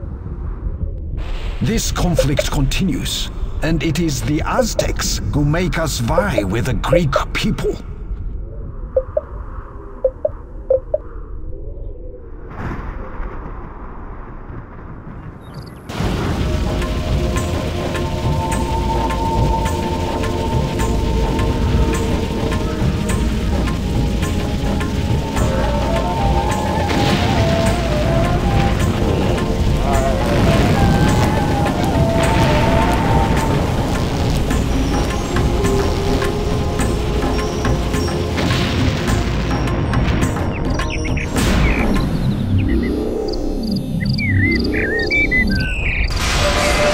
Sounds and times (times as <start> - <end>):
Music: 1.6 - 2.5, 6.0 - 6.6, 15.9 - 46.9
Speech: 1.6 - 8.0.